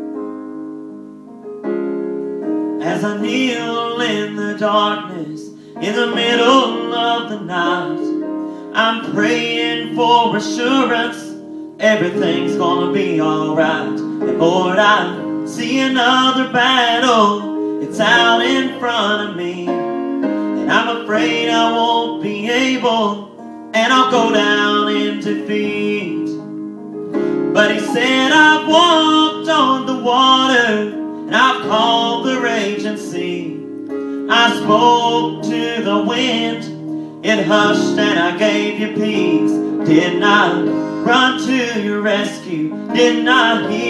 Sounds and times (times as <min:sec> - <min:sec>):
Music: 0:00.0 - 0:43.8
Male singing: 0:02.8 - 0:19.9, 0:20.6 - 0:26.4, 0:27.5 - 0:33.6, 0:34.3 - 0:43.8.